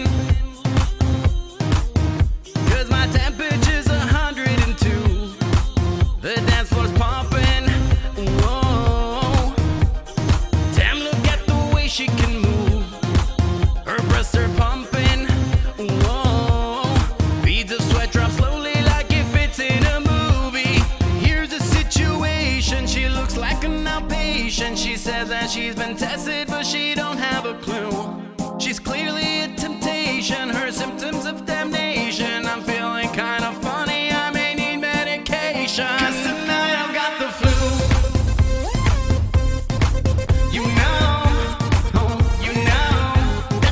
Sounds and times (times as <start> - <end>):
Independent music: 0.0 - 43.7
Middle Eastern music: 0.0 - 43.7.